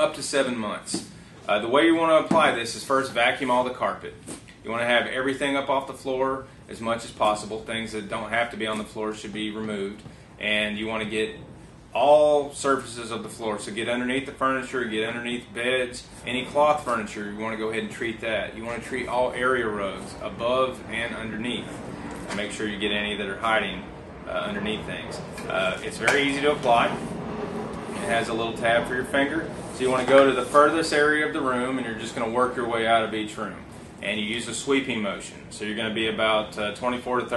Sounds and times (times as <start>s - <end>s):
Speech: 0.0s - 11.4s, 12.0s - 21.7s, 22.3s - 27.0s, 28.0s - 37.3s.